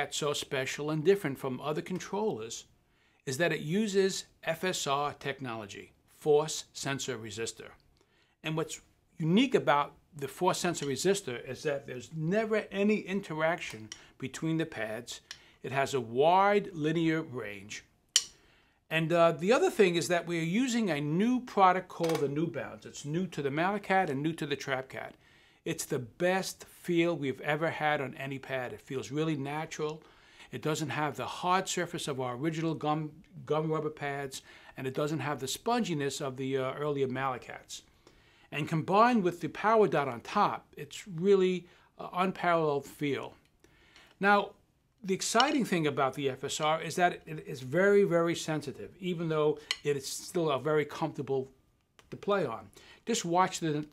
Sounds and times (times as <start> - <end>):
Speech: 0.0 - 2.7, 3.3 - 7.8, 8.4 - 17.9, 18.9 - 37.9, 38.5 - 43.4, 44.2 - 53.9.